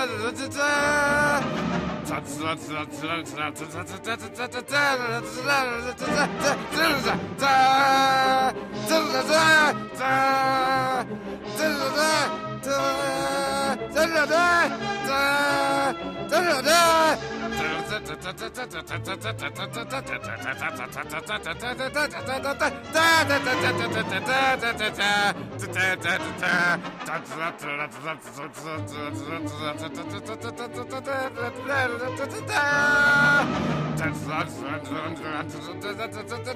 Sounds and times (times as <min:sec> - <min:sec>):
Music: 0:00.0 - 0:36.5.